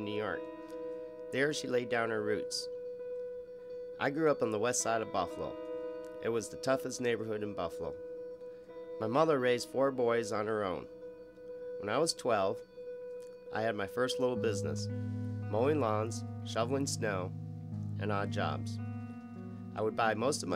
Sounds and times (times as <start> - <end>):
Speech: 0.0 - 0.4, 1.3 - 2.7, 4.0 - 5.6, 6.2 - 8.0, 9.0 - 10.9, 11.8 - 12.6, 13.5 - 14.9, 15.5 - 17.3, 18.0 - 18.8, 19.8 - 20.5
Music: 0.0 - 20.5.